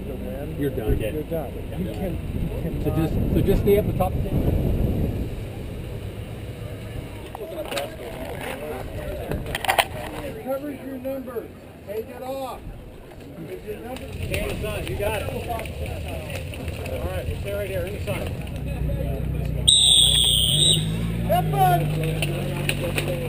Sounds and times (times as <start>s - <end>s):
Speech: 7.2s - 19.7s, 21.2s - 23.2s.